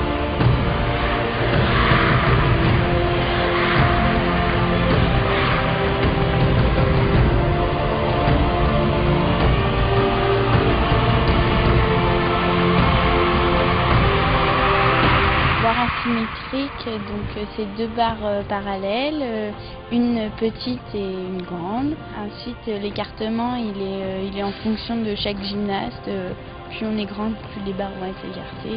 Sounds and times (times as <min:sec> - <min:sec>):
Music: 0:00.0 - 0:28.7
Speech: 0:15.6 - 0:28.7.